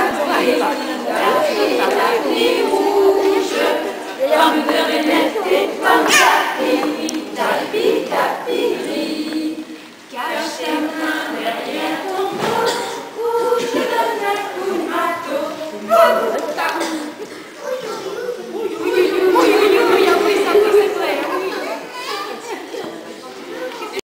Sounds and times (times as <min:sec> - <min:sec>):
Speech: 0:00.0 - 0:03.9, 0:15.5 - 0:24.0.